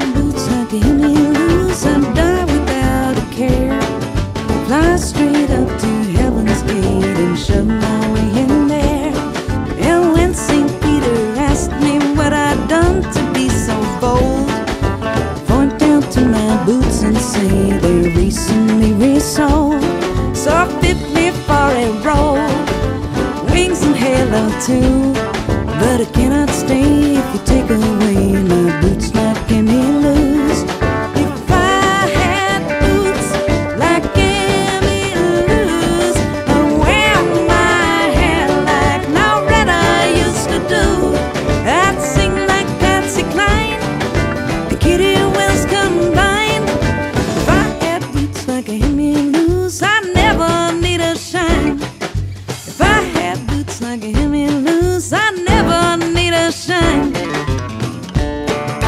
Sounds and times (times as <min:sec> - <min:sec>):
Soul music: 0:00.0 - 0:58.8.